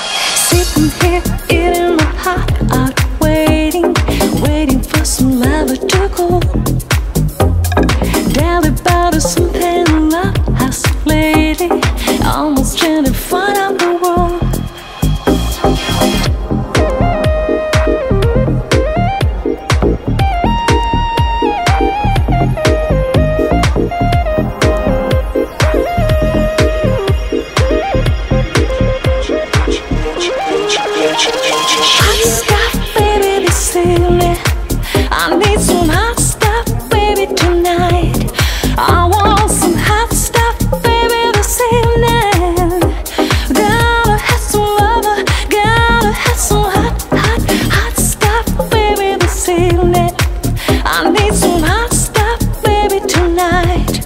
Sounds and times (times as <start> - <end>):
Rhythm and blues: 0.0 - 54.0.